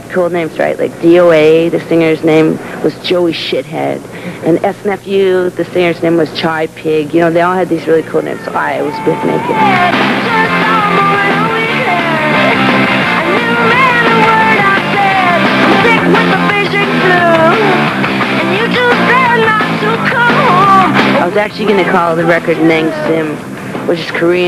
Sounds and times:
Speech: 0.0 - 9.7, 21.2 - 24.4
Music: 8.0 - 24.4.

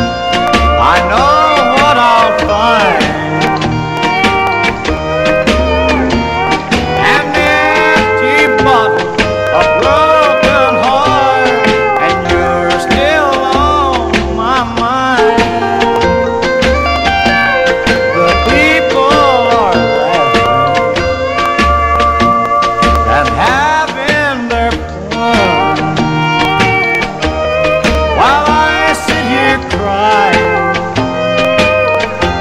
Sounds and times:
Steel guitar, slide guitar: 0.0 - 32.4.

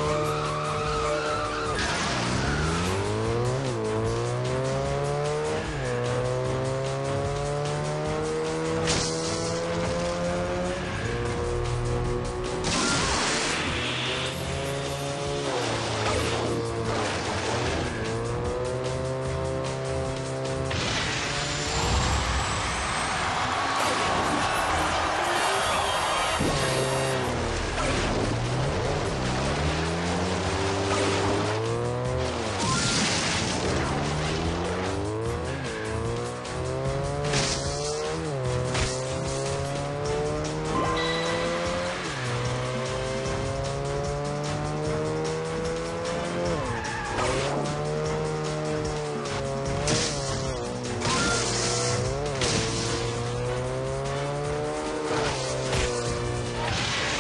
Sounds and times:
Music: 0.0 - 57.2
Vehicle: 0.0 - 57.2.

